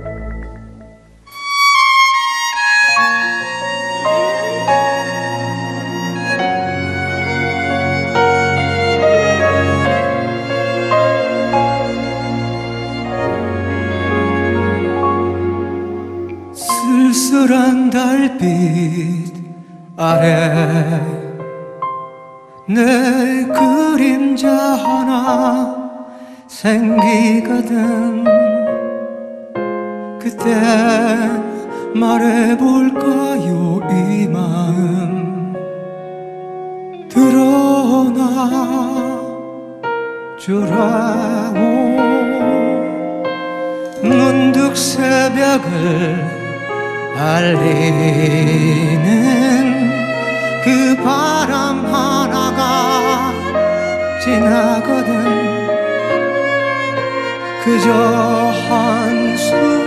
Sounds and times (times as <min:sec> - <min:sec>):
Music: 0:00.0 - 0:59.8.